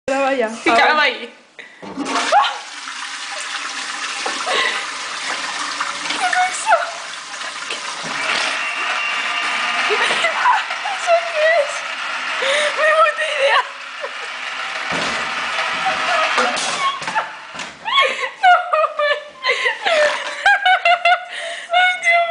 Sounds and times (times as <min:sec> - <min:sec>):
Speech: 0:00.1 - 0:01.4
Toilet flush: 0:01.8 - 0:17.6.